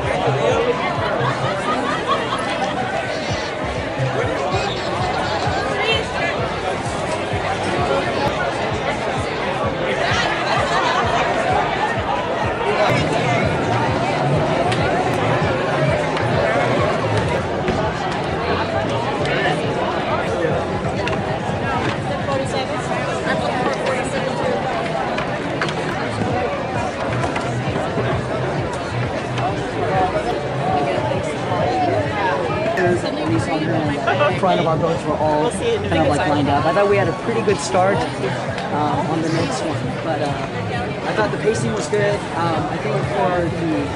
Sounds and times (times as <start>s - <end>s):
Music: 0.0s - 43.9s
Speech: 0.0s - 43.9s.